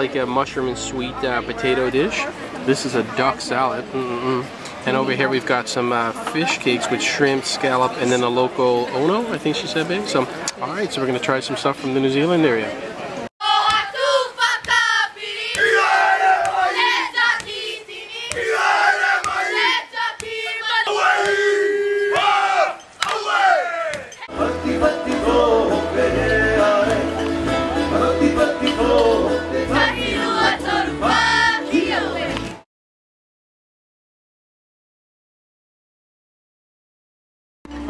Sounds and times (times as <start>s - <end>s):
Crowd: 0.0s - 32.6s
Battle cry: 13.4s - 32.4s.